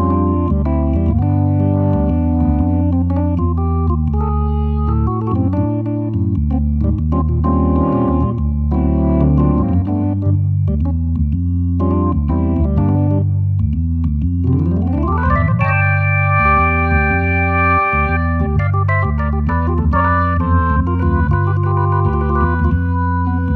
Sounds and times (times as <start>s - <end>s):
Organ: 0.0s - 23.5s.